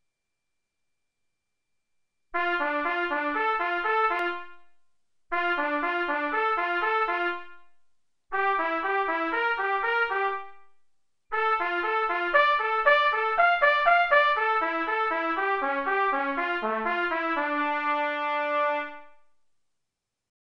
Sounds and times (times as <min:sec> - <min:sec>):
Trumpet: 0:02.4 - 0:19.3.